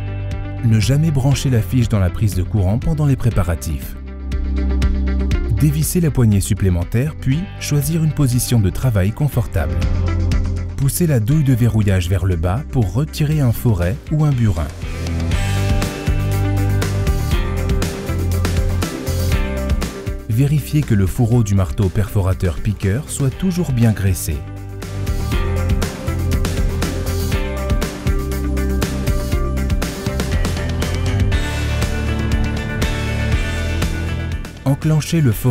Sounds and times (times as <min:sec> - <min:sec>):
Music: 0:00.0 - 0:35.5
Speech: 0:00.6 - 0:04.0, 0:05.5 - 0:09.8, 0:10.8 - 0:14.8, 0:20.3 - 0:24.4, 0:34.6 - 0:35.5.